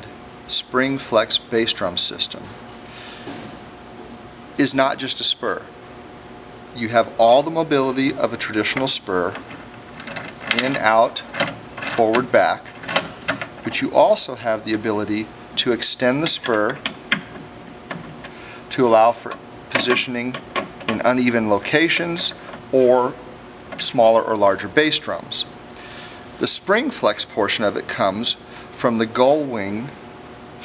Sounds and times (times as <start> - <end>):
Speech: 0.0 - 2.5, 4.6 - 5.7, 6.8 - 9.4, 10.5 - 11.3, 11.9 - 12.7, 13.6 - 16.8, 18.7 - 23.2, 23.8 - 25.5, 26.4 - 30.0.